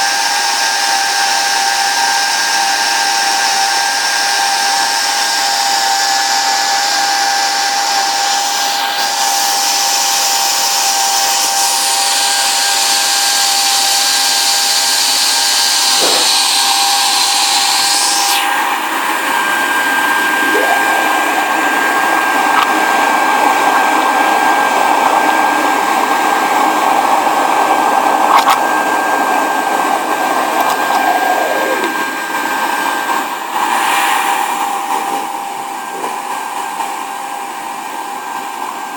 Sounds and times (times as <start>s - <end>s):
Blender: 0.0s - 38.9s.